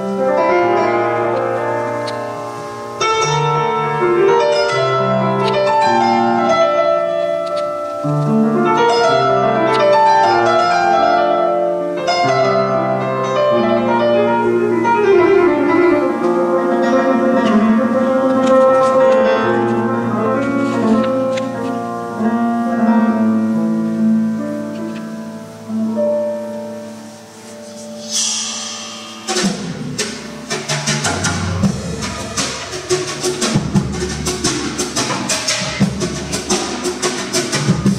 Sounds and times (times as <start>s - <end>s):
Flamenco: 0.0s - 25.2s, 27.4s - 37.9s.